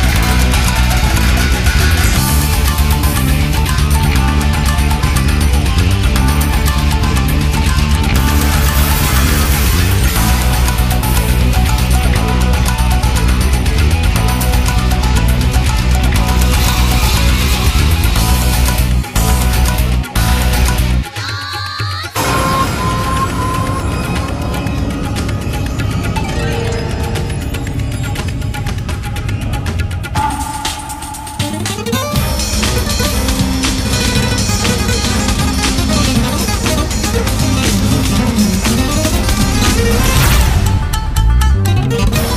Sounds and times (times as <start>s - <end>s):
Funny music: 0.0s - 42.3s.